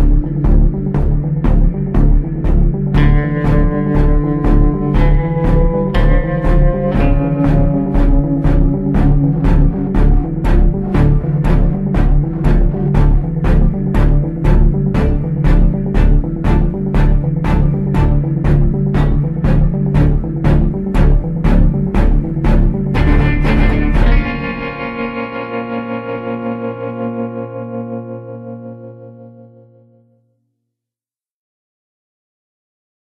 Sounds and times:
Effects unit: 0.0s - 30.8s
Music: 0.0s - 31.0s.

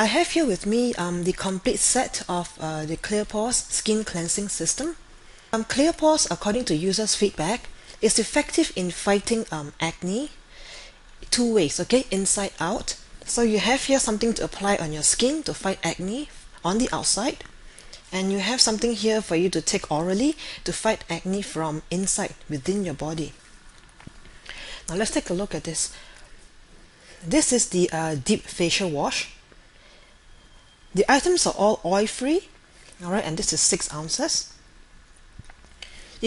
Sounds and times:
Speech: 0.0s - 5.0s, 5.6s - 10.4s, 11.2s - 17.5s, 18.1s - 23.4s, 24.9s - 26.0s, 27.2s - 29.4s, 31.0s - 34.6s.

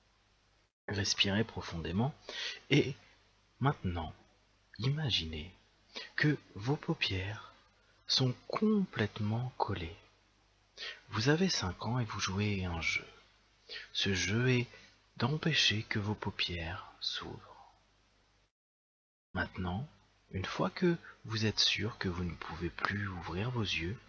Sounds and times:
Speech: 0.9s - 3.0s, 3.6s - 10.1s, 11.1s - 13.2s, 13.8s - 17.8s, 19.4s - 24.0s.

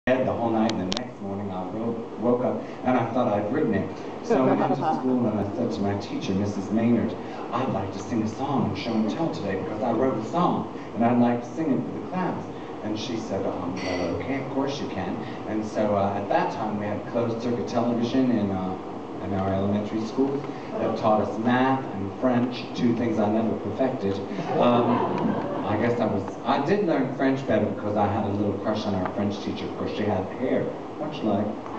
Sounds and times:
Inside, large room or hall: 0.1s - 31.7s
Speech: 0.1s - 31.7s.

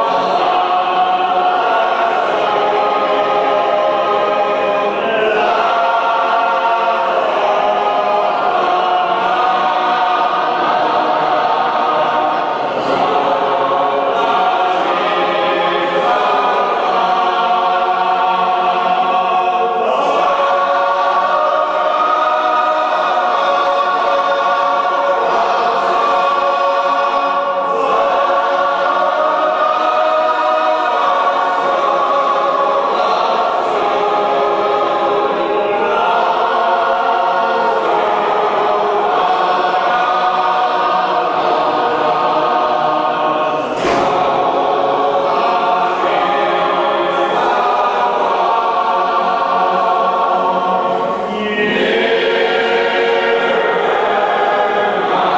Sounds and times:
Music: 0.0s - 55.3s.

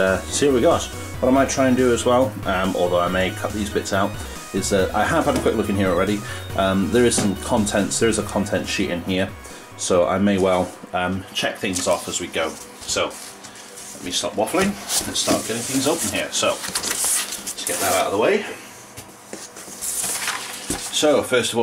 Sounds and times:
Speech: 0.0s - 13.2s, 14.0s - 16.6s, 17.6s - 18.6s, 20.9s - 21.6s.

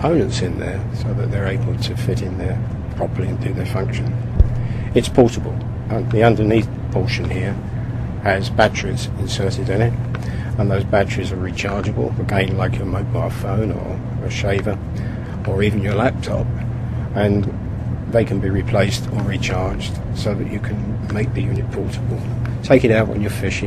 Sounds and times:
Speech: 0.0s - 4.2s, 4.9s - 7.6s, 8.2s - 14.8s, 15.4s - 16.5s, 17.1s - 23.6s.

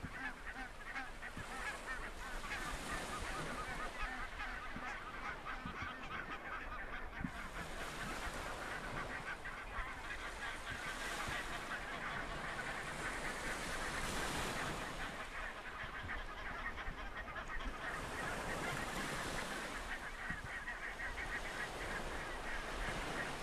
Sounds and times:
Honk: 0.0s - 23.4s.

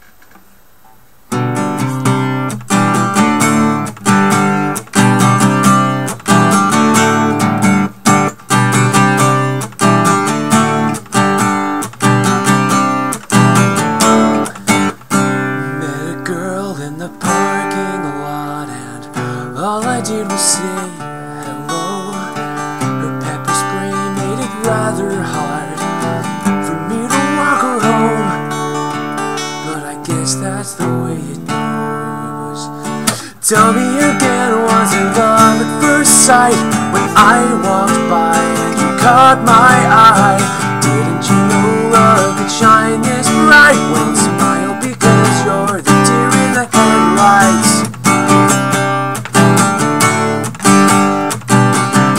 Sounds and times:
Music: 1.3s - 52.1s.

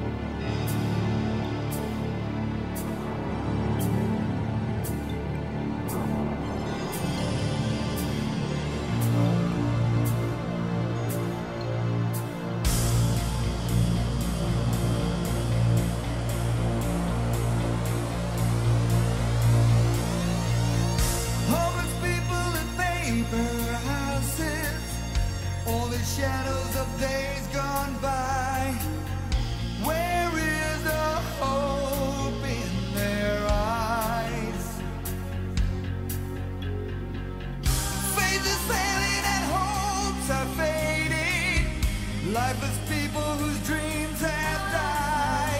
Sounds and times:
Music: 0.0s - 45.5s.

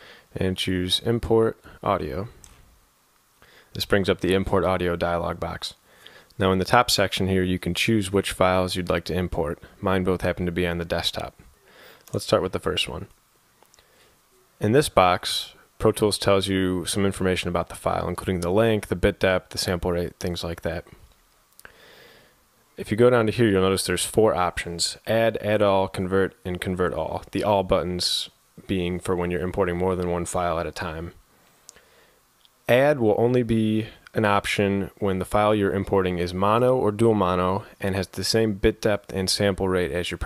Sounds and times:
Speech: 0.3s - 2.4s, 3.8s - 5.8s, 6.4s - 11.4s, 12.1s - 13.2s, 14.6s - 21.0s, 22.8s - 31.2s, 32.6s - 40.2s.

